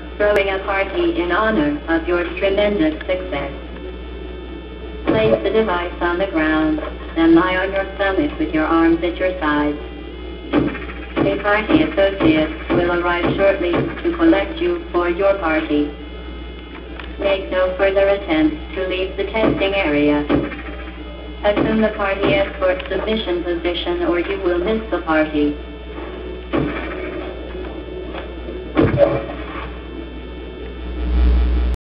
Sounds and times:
Speech: 0.2 - 3.6, 5.1 - 9.8, 11.3 - 16.0, 17.2 - 20.3, 21.4 - 25.6.

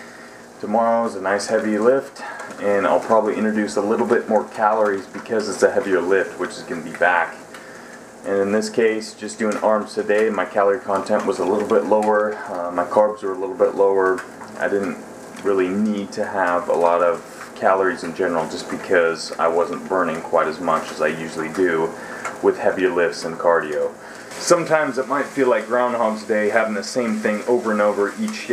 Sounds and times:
Inside, small room: 0.0 - 28.5
Speech: 0.6 - 7.5, 8.2 - 28.5.

